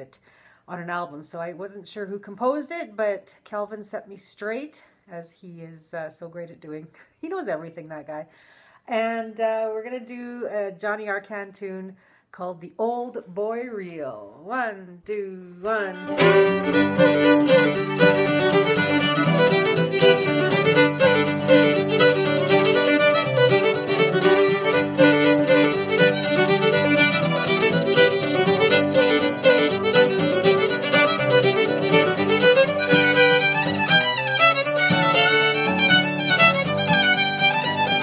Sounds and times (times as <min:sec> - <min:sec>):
Speech: 0:00.0 - 0:08.3, 0:08.9 - 0:16.1
Violin, fiddle: 0:15.7 - 0:38.0.